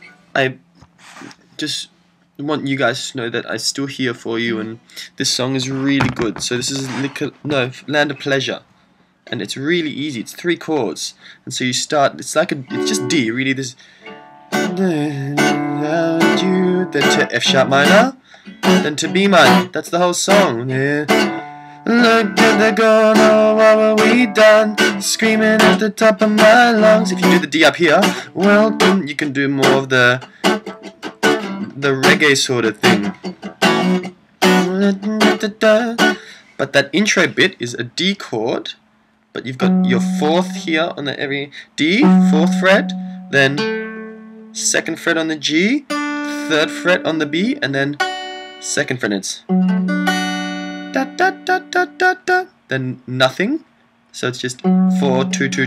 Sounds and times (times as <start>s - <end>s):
Speech: 0.4s - 0.6s, 1.2s - 8.7s, 9.3s - 13.8s, 16.4s - 18.2s, 18.8s - 20.8s, 27.0s - 30.2s, 31.7s - 33.1s, 36.6s - 38.8s, 39.4s - 43.6s, 44.6s - 48.0s, 48.6s - 49.5s, 51.5s - 55.6s
Strum: 12.2s - 36.4s, 39.6s - 41.0s, 41.9s - 48.8s, 49.5s - 51.8s, 54.6s - 55.6s
Acoustic guitar: 12.6s - 37.4s, 39.6s - 41.0s, 41.6s - 52.5s, 54.6s - 55.6s.